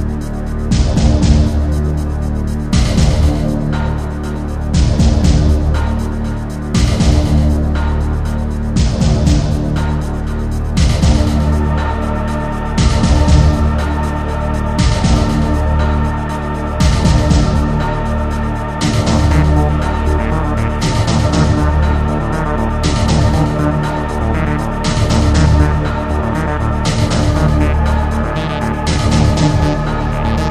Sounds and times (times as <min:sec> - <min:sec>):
Theme music: 0:00.0 - 0:30.5.